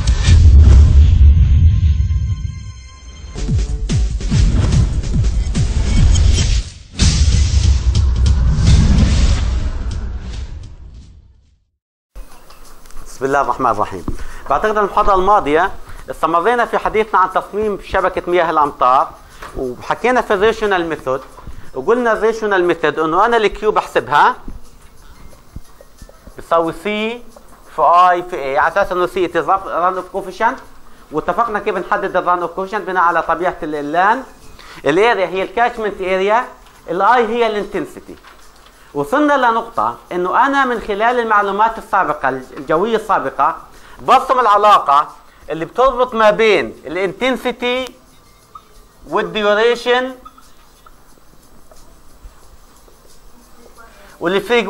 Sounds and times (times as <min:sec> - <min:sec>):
Speech: 0:13.1 - 0:24.4, 0:26.4 - 0:38.2, 0:39.0 - 0:48.0, 0:49.1 - 0:50.3, 0:53.4 - 0:54.7.